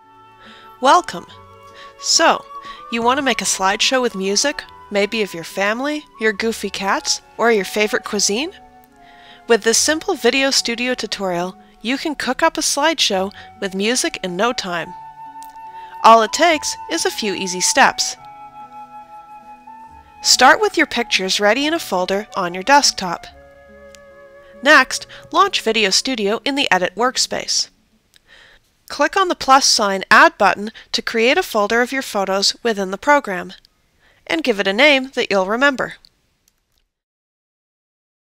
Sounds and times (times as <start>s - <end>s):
Music: 0.0s - 26.4s
Speech: 0.8s - 1.4s, 2.0s - 8.6s, 9.5s - 15.0s, 16.0s - 18.2s, 20.2s - 23.3s, 24.6s - 27.7s, 28.9s - 33.6s, 34.3s - 36.1s.